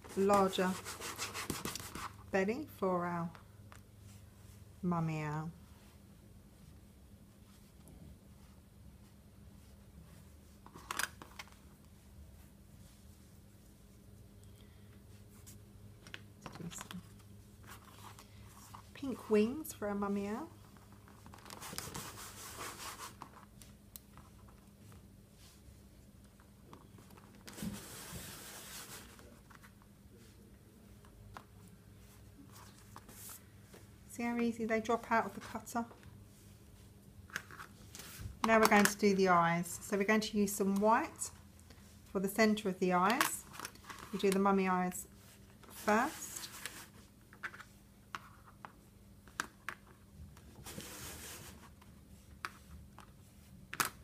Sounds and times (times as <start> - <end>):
Rub: 0.1 - 2.2, 21.6 - 23.3, 27.6 - 29.2, 50.6 - 53.5.